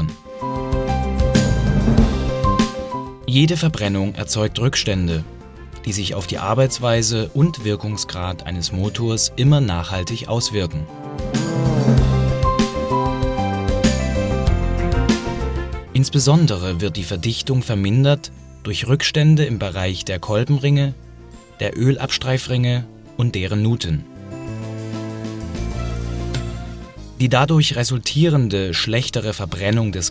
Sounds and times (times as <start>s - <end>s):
Music: 0.0s - 30.1s
Speech: 3.3s - 10.9s, 15.9s - 21.0s, 21.6s - 24.0s, 27.2s - 30.1s.